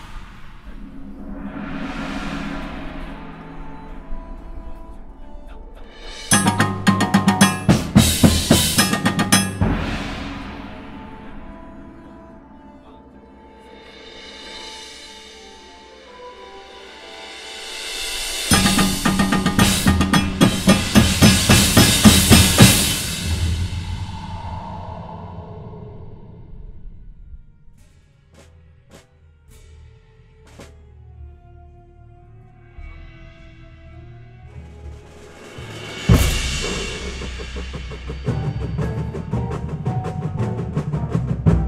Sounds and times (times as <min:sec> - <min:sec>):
Outside, urban or manmade: 0:00.0 - 0:41.6
Drum: 0:06.2 - 0:11.2, 0:18.5 - 0:24.8, 0:35.5 - 0:41.6.